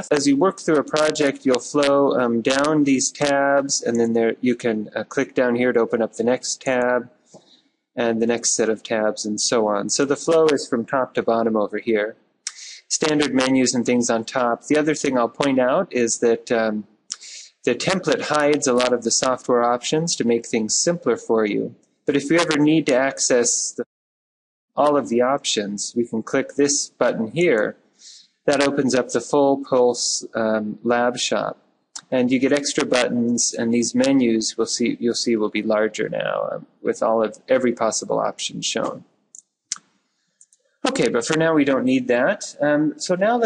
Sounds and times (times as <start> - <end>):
Speech: 0.0 - 7.1, 8.0 - 23.9, 24.8 - 39.0, 40.9 - 43.4.